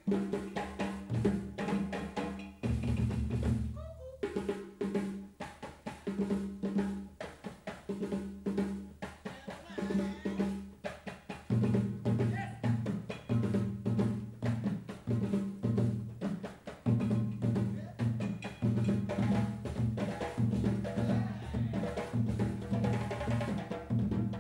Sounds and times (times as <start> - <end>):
Percussion: 0.0 - 24.4.